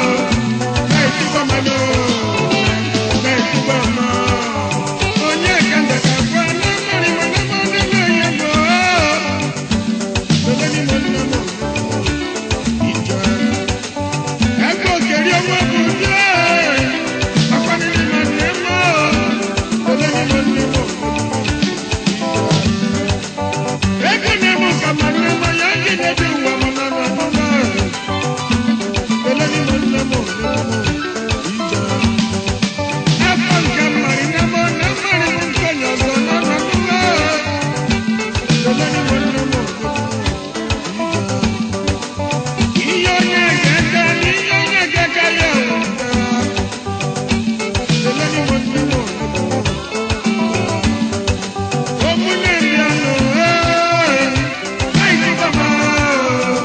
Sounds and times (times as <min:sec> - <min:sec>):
Music of Africa: 0:00.0 - 0:56.6.